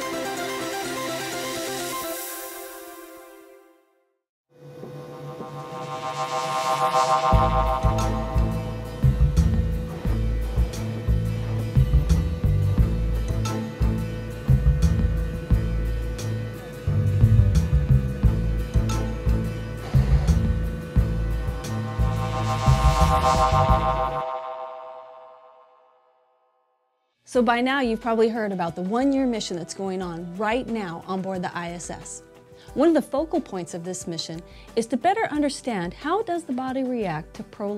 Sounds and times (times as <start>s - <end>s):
Music: 0.0s - 25.9s, 27.2s - 37.7s
Speech: 27.3s - 32.2s, 32.8s - 37.7s.